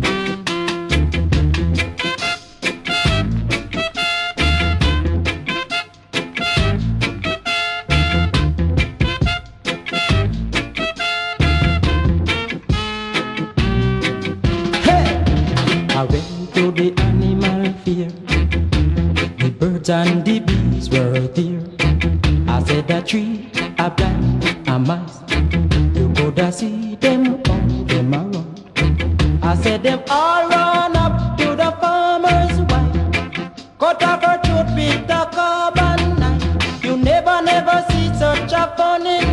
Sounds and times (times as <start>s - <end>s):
Music: 0.0s - 39.3s.